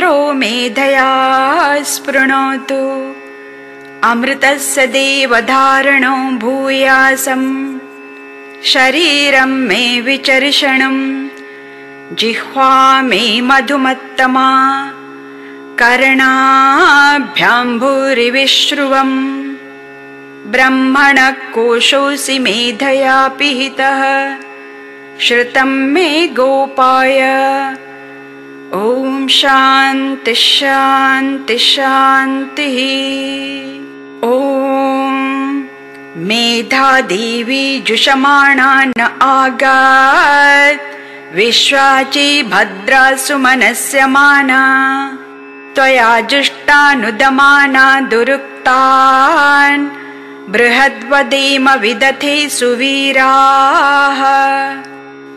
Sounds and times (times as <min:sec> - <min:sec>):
Mantra: 0:00.0 - 0:03.2, 0:08.6 - 0:11.3, 0:12.1 - 0:15.0, 0:15.8 - 0:19.6, 0:20.5 - 0:24.4, 0:28.7 - 0:45.2, 0:45.8 - 0:54.9.